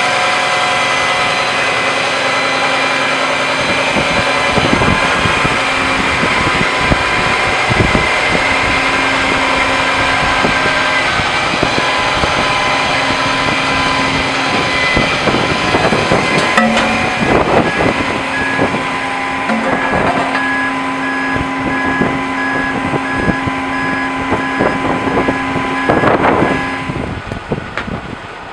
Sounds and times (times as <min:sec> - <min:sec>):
Truck: 0:00.0 - 0:28.5.